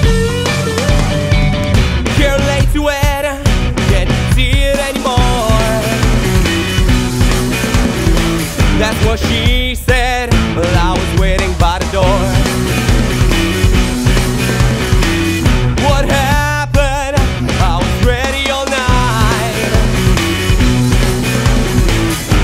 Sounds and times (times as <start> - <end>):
Music: 0.0 - 22.4.